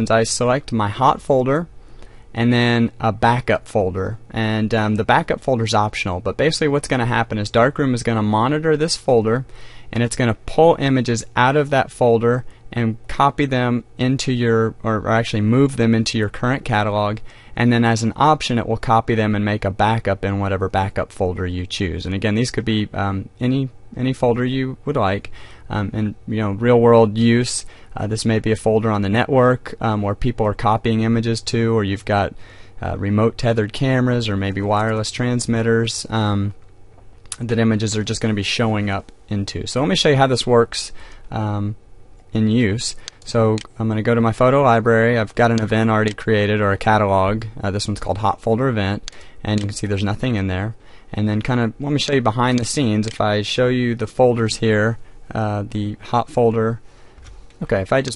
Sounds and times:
Speech: 0.0 - 1.7, 2.4 - 36.6, 37.3 - 56.8, 57.6 - 58.1.

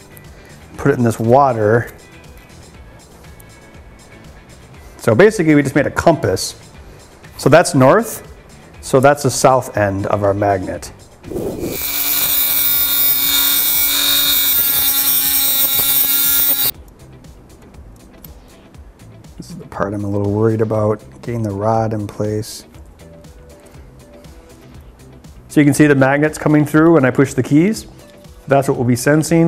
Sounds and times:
Music: 0.0 - 29.4
Speech: 0.8 - 2.0, 5.0 - 6.6, 7.4 - 11.0, 19.4 - 22.7, 25.5 - 27.9, 28.5 - 29.4.

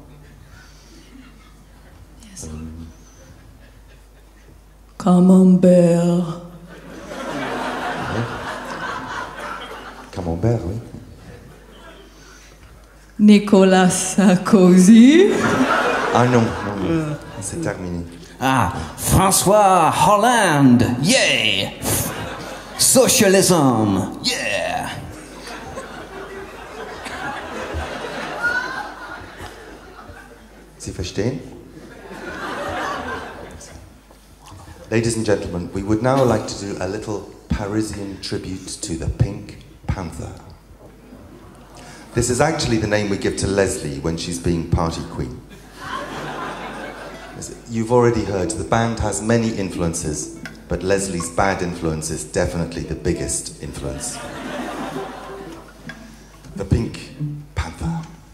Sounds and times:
Inside, large room or hall: 0.0 - 58.3.

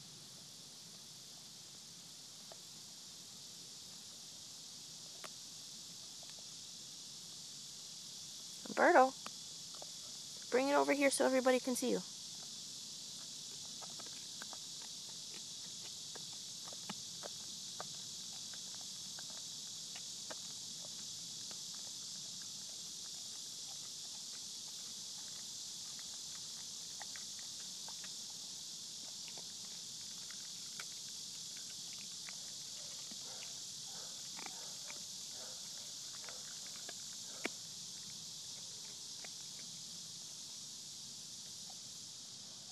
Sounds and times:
Animal: 8.6 - 40.4
Speech: 8.7 - 9.2, 10.6 - 12.0.

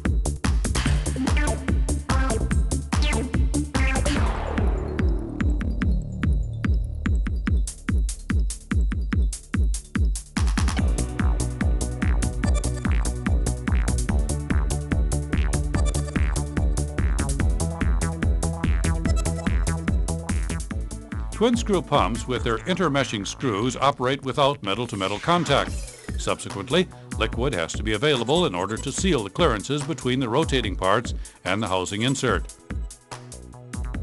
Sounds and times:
Music: 0.0 - 34.0
Speech: 21.4 - 32.5.

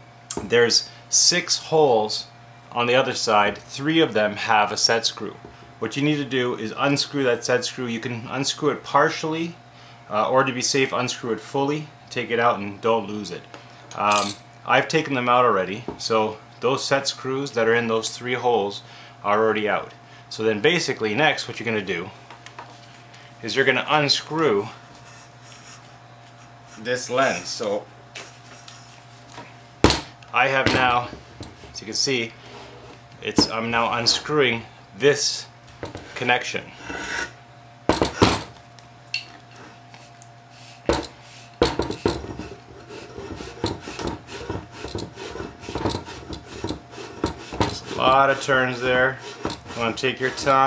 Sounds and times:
Speech: 0.4 - 22.2, 23.4 - 24.8, 26.8 - 27.9, 30.3 - 31.2, 31.8 - 32.4, 33.2 - 35.5, 36.2 - 36.8, 47.7 - 50.6.

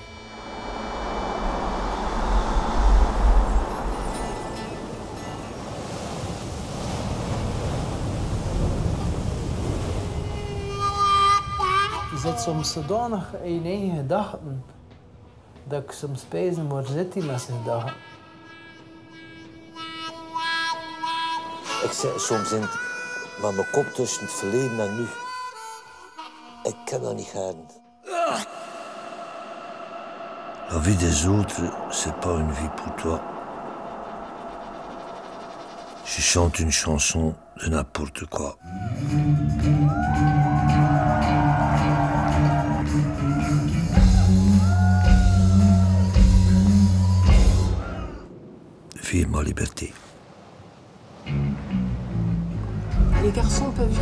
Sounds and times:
Music: 10.4 - 13.6, 17.2 - 28.0, 38.7 - 47.9, 51.3 - 54.0.

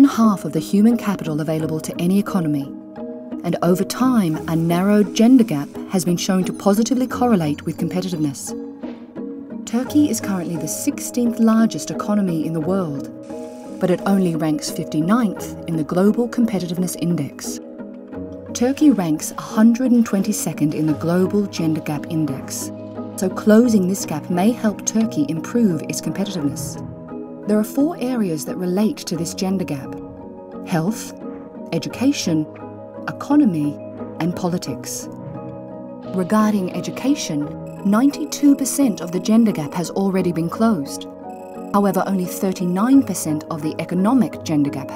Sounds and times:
Speech: 0.0 - 2.7, 3.4 - 8.5, 9.7 - 13.1, 13.8 - 17.6, 18.6 - 26.8, 27.5 - 30.0, 30.7 - 32.5, 33.1 - 35.1, 36.1 - 41.0, 41.8 - 44.9
Music: 0.0 - 44.9.

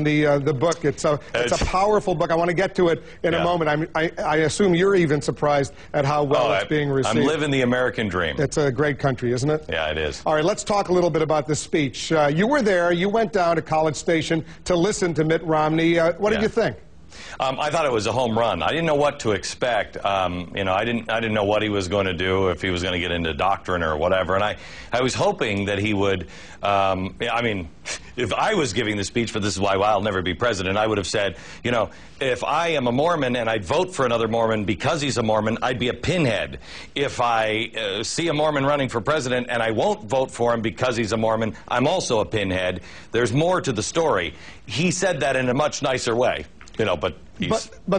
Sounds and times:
Male speech, man speaking: 0.0 - 16.8, 17.4 - 47.9
Conversation: 0.0 - 47.9.

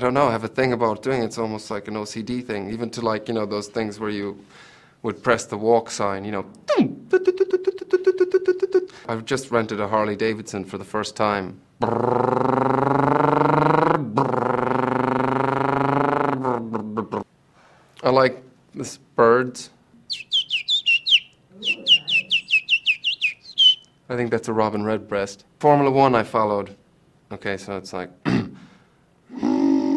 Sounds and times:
Chirp, tweet: 20.1 - 23.9.

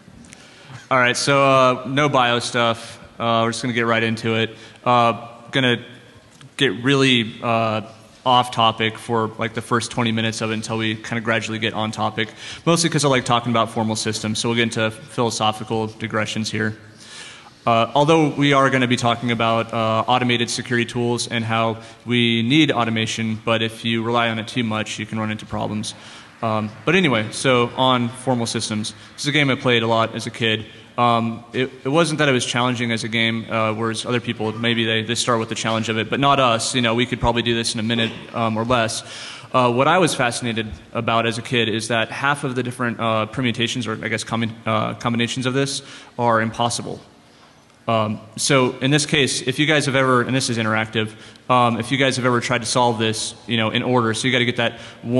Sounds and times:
Speech: 0.7 - 16.9, 17.6 - 47.2, 47.8 - 55.1.

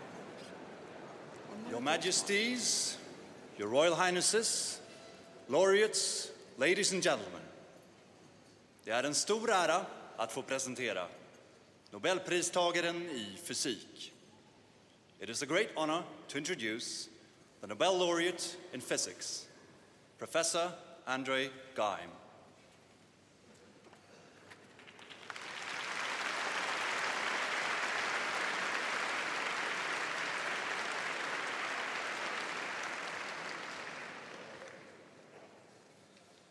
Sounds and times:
Male speech, man speaking: 1.6 - 4.9, 5.5 - 7.6, 8.9 - 11.2, 11.9 - 14.2, 15.2 - 19.6, 20.2 - 22.2
Narration, monologue: 1.6 - 23.2.

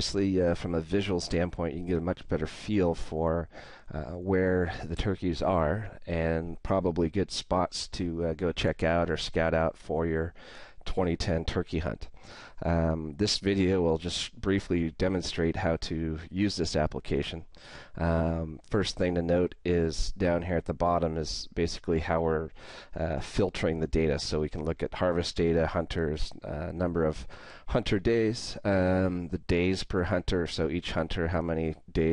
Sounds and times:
Speech: 0.0 - 32.1.

